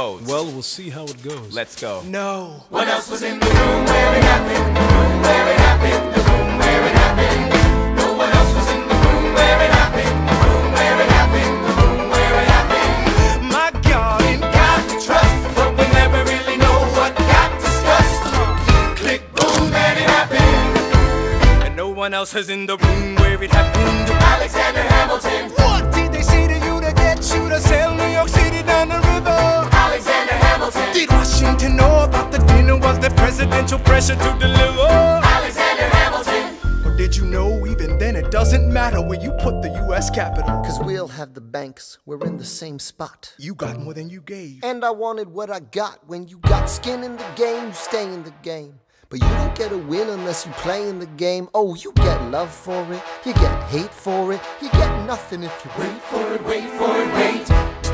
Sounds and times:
Jazz: 3.4s - 19.2s, 23.0s - 36.1s.

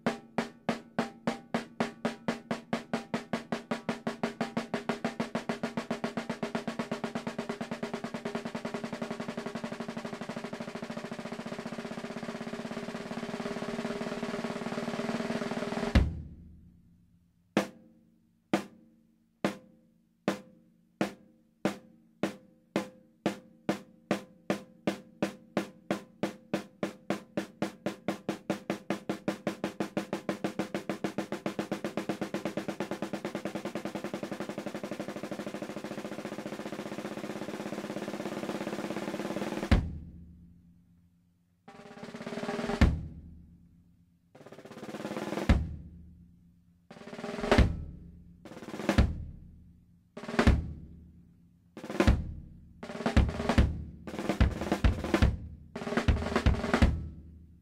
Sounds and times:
Music: 0.0s - 57.6s.

